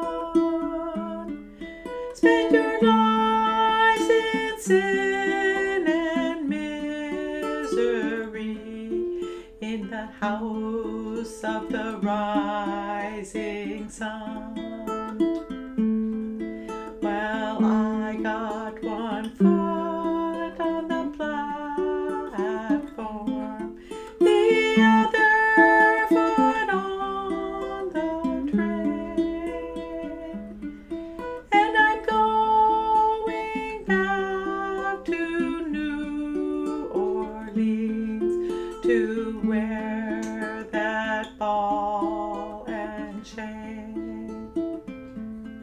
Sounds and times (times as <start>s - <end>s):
Ukulele: 0.0s - 45.6s.